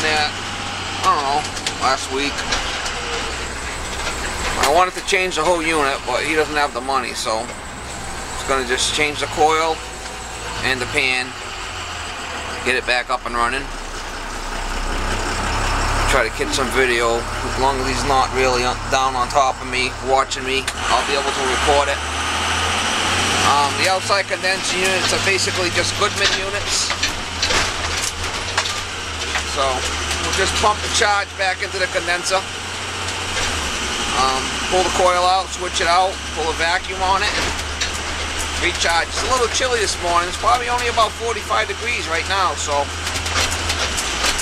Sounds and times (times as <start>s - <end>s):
Speech: 0.0s - 0.4s, 1.0s - 2.5s, 4.6s - 7.5s, 8.4s - 9.8s, 10.6s - 11.4s, 12.6s - 13.7s, 16.1s - 22.0s, 23.4s - 27.0s, 29.5s - 32.4s, 34.1s - 37.5s, 38.6s - 42.9s
Truck: 0.0s - 44.4s.